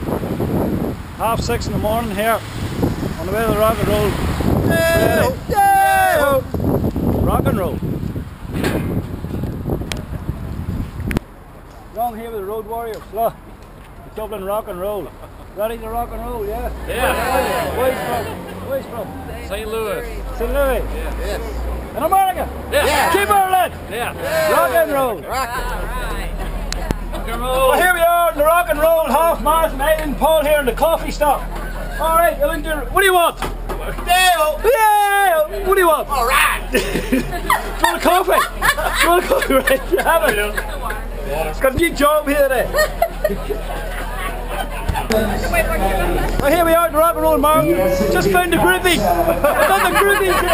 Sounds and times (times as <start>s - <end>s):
Outside, urban or manmade: 0.0s - 50.5s.